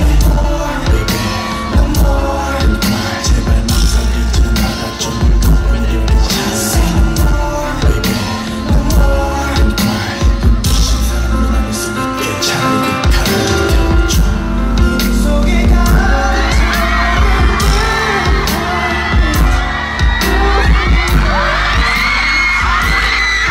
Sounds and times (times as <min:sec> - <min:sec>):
Music: 0:00.0 - 0:23.5.